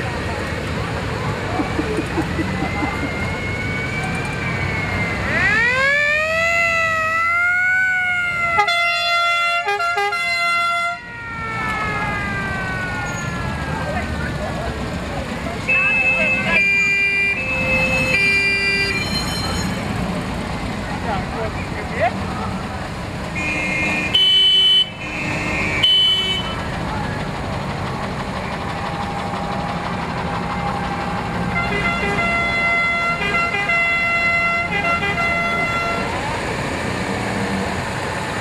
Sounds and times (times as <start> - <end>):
Fire engine, fire truck (siren): 1.6 - 20.0, 28.6 - 38.4
Vehicle horn, car horn, honking: 23.4 - 26.6, 31.6 - 36.1.